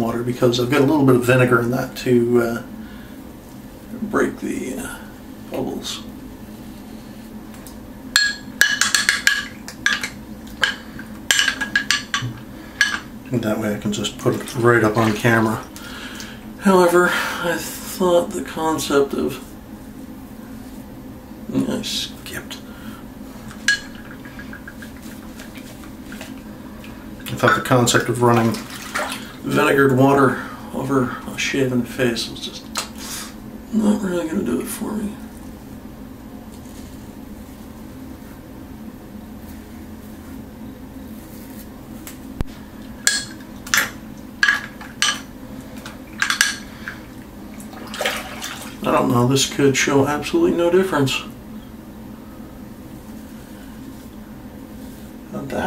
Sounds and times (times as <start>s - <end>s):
Speech: 0.0s - 2.7s, 3.9s - 6.1s, 13.3s - 15.7s, 16.6s - 19.5s, 21.5s - 22.7s, 27.3s - 28.7s, 29.4s - 32.8s, 33.7s - 35.3s, 48.8s - 51.4s, 55.3s - 55.6s
Inside, small room: 0.0s - 55.6s.